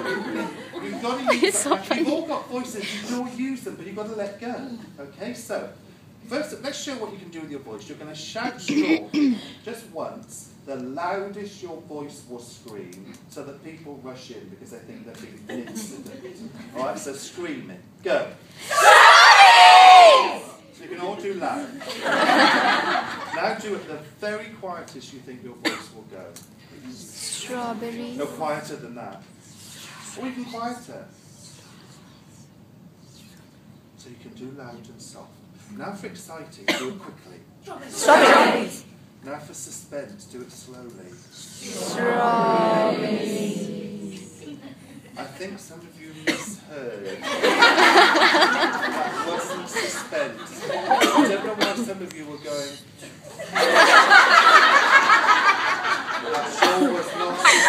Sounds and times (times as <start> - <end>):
Throat clearing: 8.5 - 9.5, 25.6 - 25.9, 36.7 - 37.0, 46.2 - 46.6.